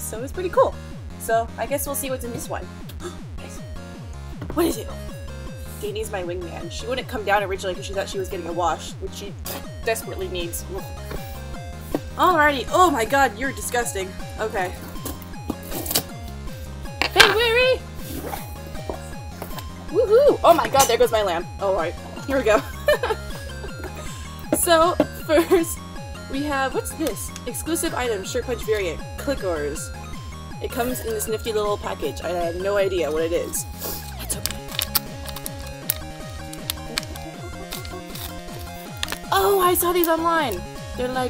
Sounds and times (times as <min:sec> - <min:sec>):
Music: 0:00.0 - 0:41.2.